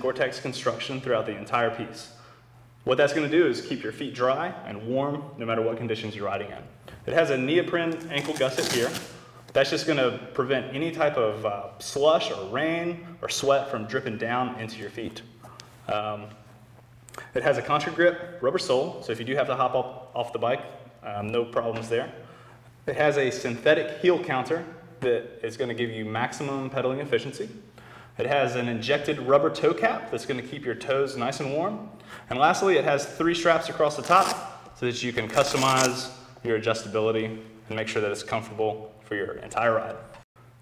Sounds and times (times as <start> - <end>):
Speech: 0.0 - 2.2, 2.8 - 15.3, 15.9 - 16.4, 17.3 - 22.2, 22.9 - 27.6, 28.2 - 40.2.